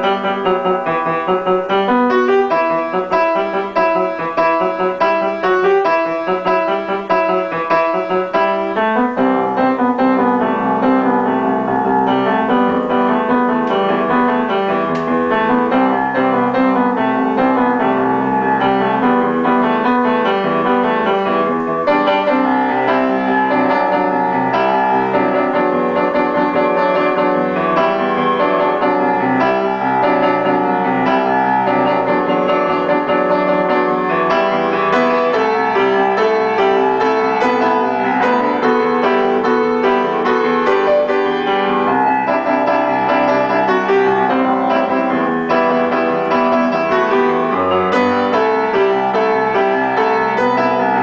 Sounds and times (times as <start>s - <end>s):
Music: 0.0s - 51.0s.